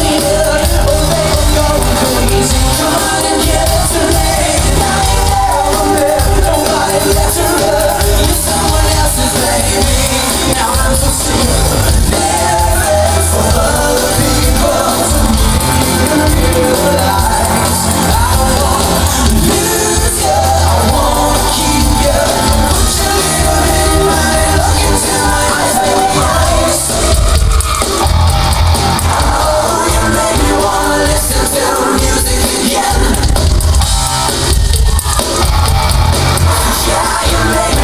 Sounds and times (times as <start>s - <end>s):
Music: 0.0s - 37.8s.